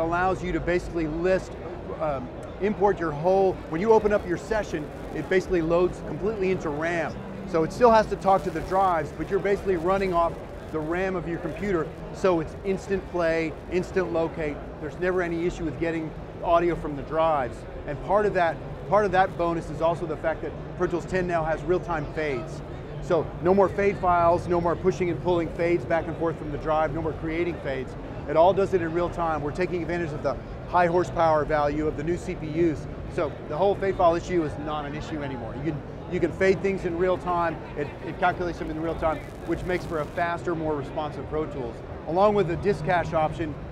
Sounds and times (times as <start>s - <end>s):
Speech: 0.0s - 43.7s.